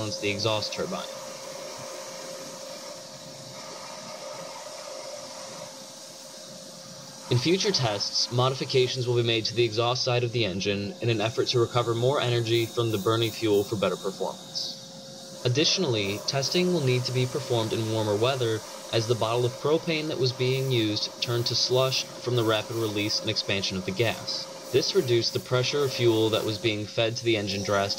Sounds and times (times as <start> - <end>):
Speech: 0.0 - 1.2, 7.3 - 14.8, 15.5 - 27.9.